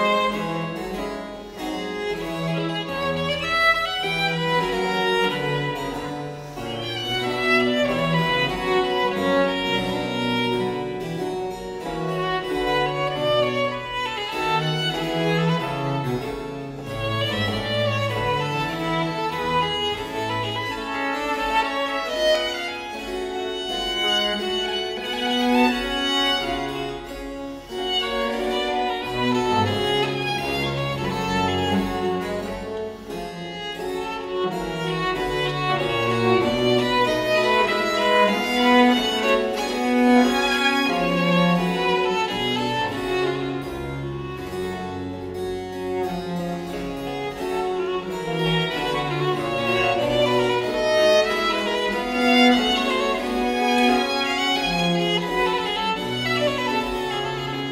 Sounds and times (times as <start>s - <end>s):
Violin, fiddle: 0.0s - 57.7s.